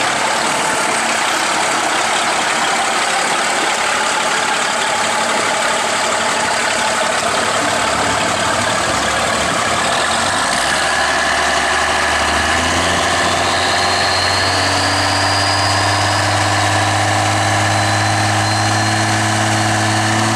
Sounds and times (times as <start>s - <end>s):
Vehicle: 0.0s - 20.3s.